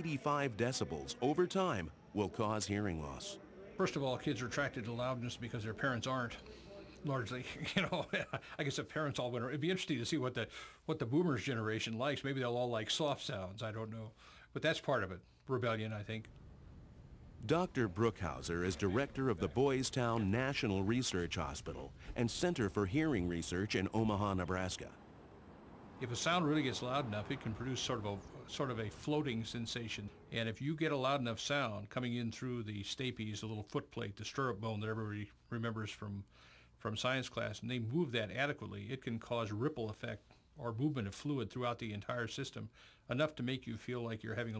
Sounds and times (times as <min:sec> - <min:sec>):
Speech: 0:00.0 - 0:16.3, 0:17.4 - 0:25.0, 0:26.0 - 0:44.5.